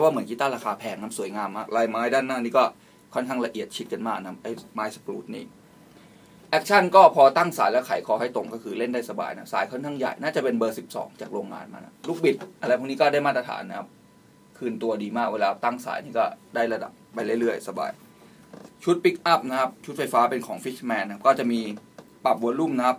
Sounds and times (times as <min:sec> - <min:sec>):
Speech: 0:00.0 - 0:05.5, 0:06.5 - 0:13.9, 0:14.6 - 0:18.0, 0:18.8 - 0:22.9.